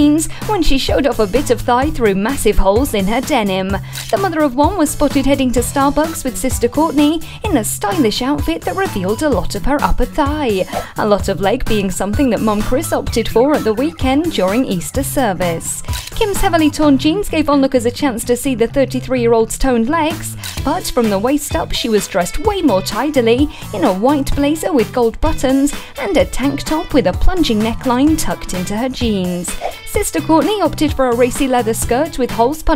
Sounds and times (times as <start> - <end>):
Music: 0.0 - 32.7
Speech: 0.0 - 32.7.